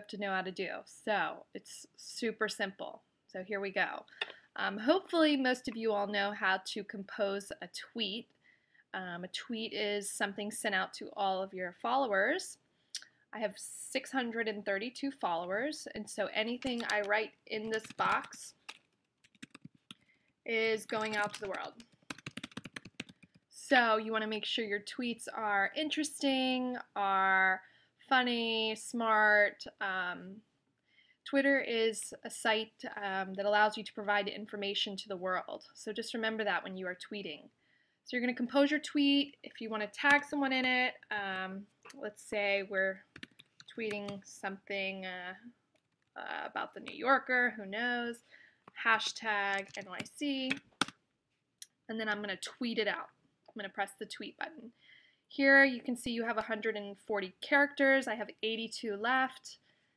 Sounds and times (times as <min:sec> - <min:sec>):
Speech: 0:00.0 - 0:08.3, 0:09.0 - 0:12.6, 0:13.4 - 0:18.6, 0:20.5 - 0:21.8, 0:23.6 - 0:30.4, 0:31.3 - 0:37.5, 0:38.1 - 0:43.0, 0:43.7 - 0:45.5, 0:46.2 - 0:48.2, 0:48.8 - 0:50.6, 0:51.9 - 0:54.7, 0:55.4 - 0:59.6.